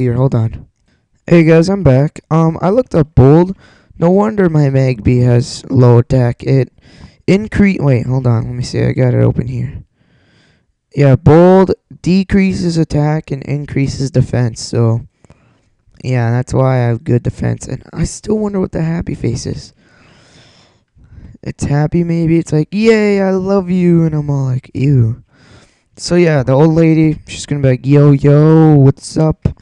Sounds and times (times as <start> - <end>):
Speech: 0.0 - 0.7, 1.3 - 9.9, 10.9 - 15.1, 16.0 - 19.8, 21.2 - 25.3, 26.0 - 29.6.